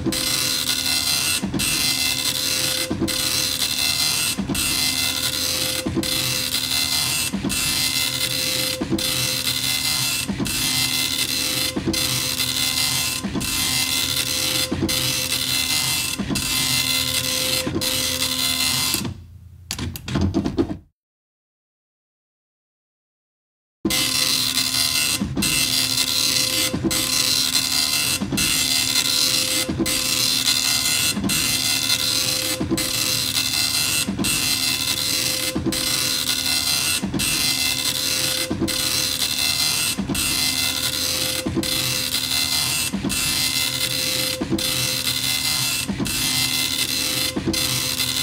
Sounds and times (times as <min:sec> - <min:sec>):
Printer: 0:00.0 - 0:19.2, 0:23.9 - 0:48.2.